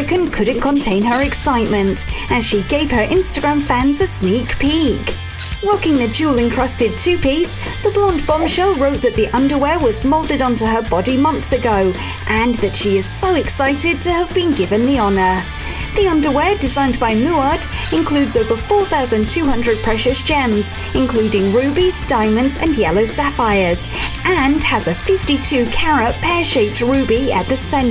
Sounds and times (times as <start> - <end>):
Speech: 0.0 - 15.4, 16.0 - 27.9
Music: 0.0 - 27.9.